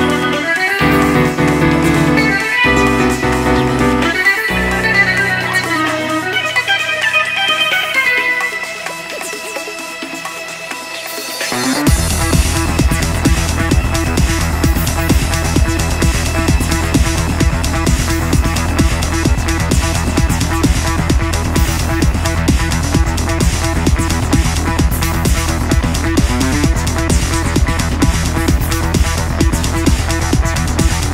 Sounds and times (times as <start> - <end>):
Music: 0.0 - 31.1.